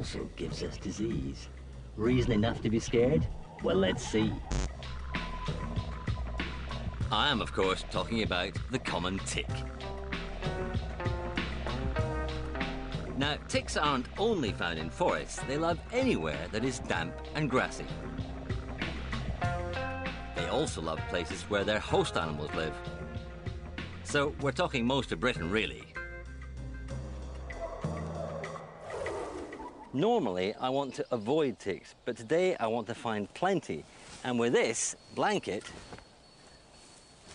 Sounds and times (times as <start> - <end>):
Speech: 0.0 - 4.4, 7.1 - 9.6, 13.2 - 18.0, 20.4 - 22.8, 24.1 - 25.9, 30.0 - 35.8
Music: 0.0 - 29.6.